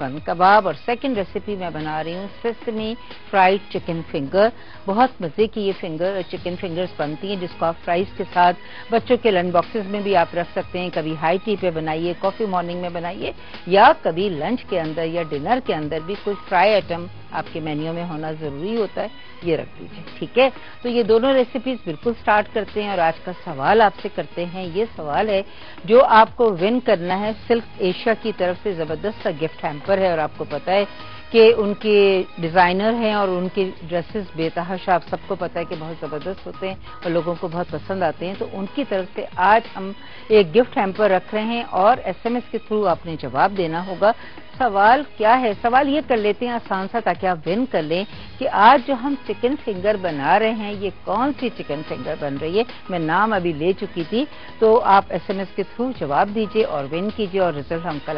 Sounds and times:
Music: 0.0s - 58.1s
Speech: 0.0s - 58.1s.

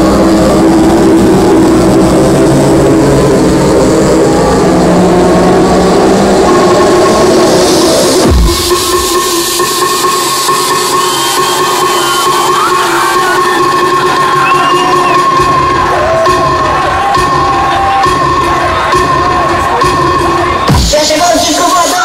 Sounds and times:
Crowd: 0.0s - 22.0s
House music: 0.0s - 22.0s
Techno: 0.0s - 22.0s
Trance music: 0.0s - 22.0s.

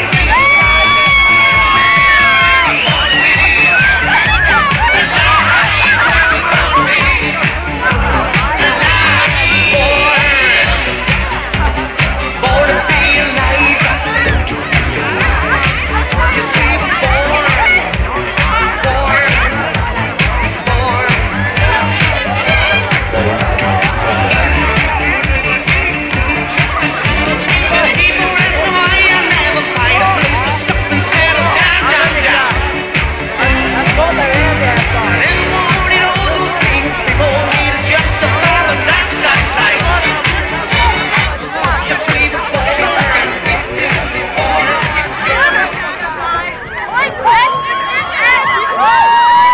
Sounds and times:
Music: 0.0s - 49.5s
Speech: 0.0s - 49.5s.

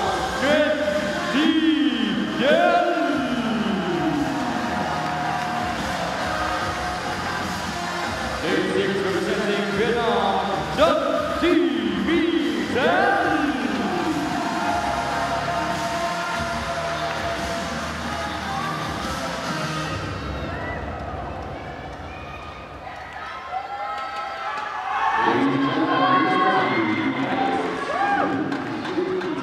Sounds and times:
Music: 0.0s - 23.4s, 24.0s - 29.4s
Speech: 8.4s - 14.1s.

